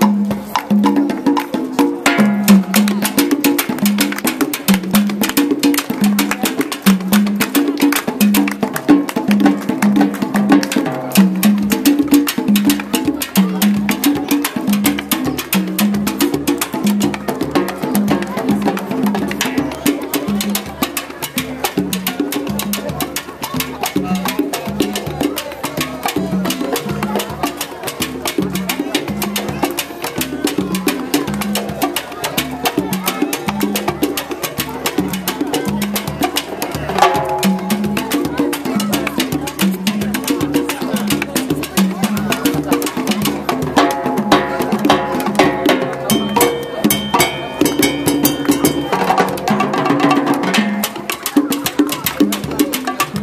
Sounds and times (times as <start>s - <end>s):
Percussion: 0.0s - 53.2s.